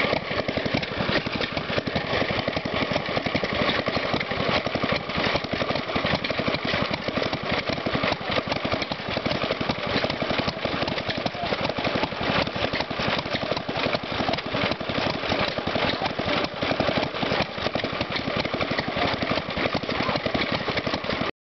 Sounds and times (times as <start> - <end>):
Medium engine (mid frequency): 0.0 - 21.3
Speech: 11.1 - 11.8, 18.3 - 20.4.